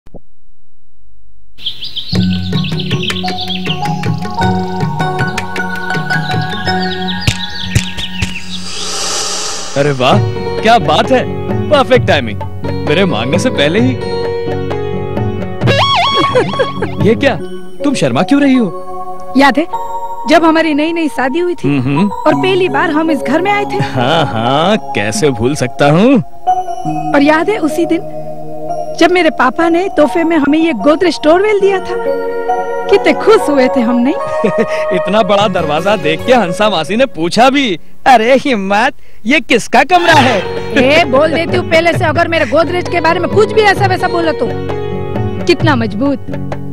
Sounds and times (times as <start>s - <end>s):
Music: 2.1s - 8.7s, 9.8s - 37.6s, 40.0s - 46.7s.